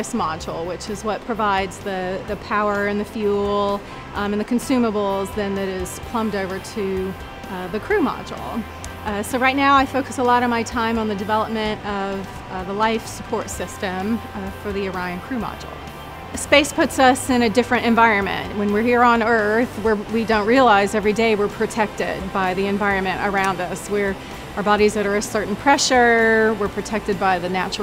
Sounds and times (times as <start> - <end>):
Speech: 0.0 - 15.7, 16.4 - 27.8
Music: 0.0 - 27.8.